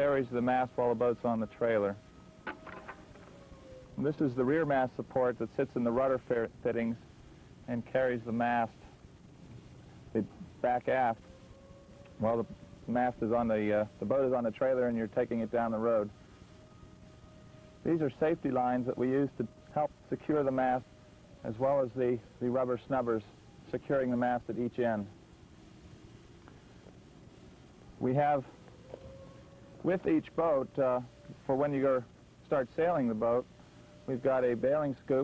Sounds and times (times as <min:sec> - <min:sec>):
Speech: 0:00.0 - 0:02.0, 0:04.0 - 0:07.0, 0:07.7 - 0:08.8, 0:10.2 - 0:11.2, 0:12.2 - 0:16.1, 0:17.9 - 0:20.8, 0:21.4 - 0:25.1, 0:28.0 - 0:28.5, 0:29.8 - 0:33.5, 0:34.1 - 0:35.2.